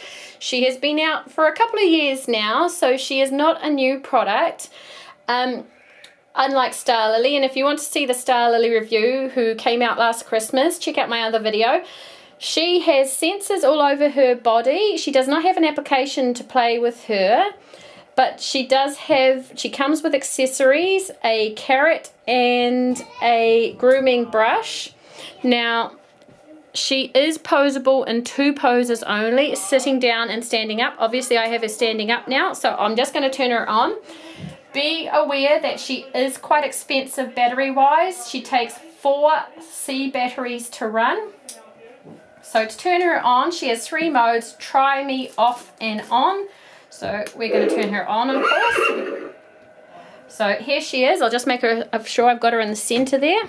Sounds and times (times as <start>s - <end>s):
Speech: 0.4s - 4.7s, 5.3s - 5.7s, 6.4s - 17.6s, 18.2s - 48.8s, 50.3s - 53.4s.